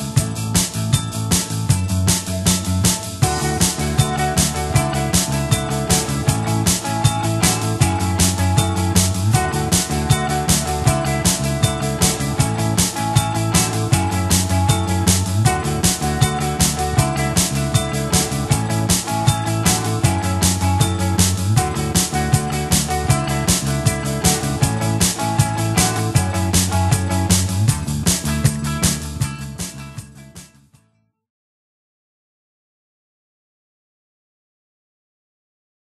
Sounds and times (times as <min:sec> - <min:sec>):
Music: 0:00.0 - 0:31.2.